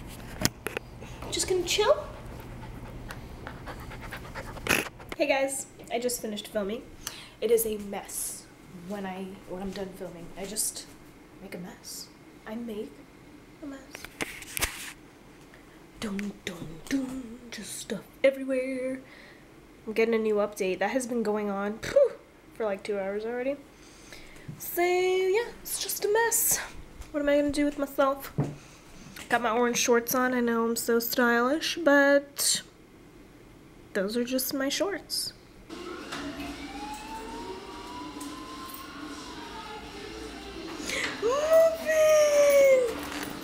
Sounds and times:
Speech: 1.3s - 2.2s, 5.2s - 13.0s, 16.0s - 19.1s, 19.9s - 23.6s, 24.6s - 28.3s, 29.3s - 32.7s, 34.0s - 35.4s, 41.2s - 43.0s.

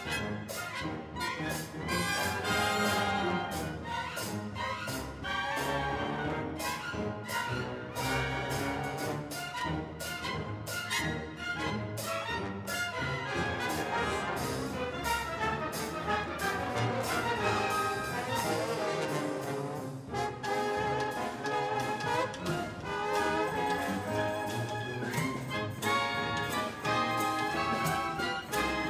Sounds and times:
Music: 0.0s - 28.8s.

